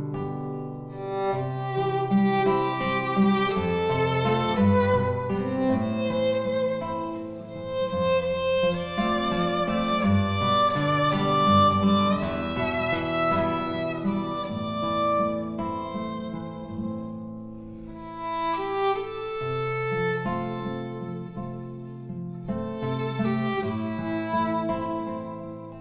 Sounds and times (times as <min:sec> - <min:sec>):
Guitar: 0:00.0 - 0:25.8
Violin, fiddle: 0:00.9 - 0:25.8.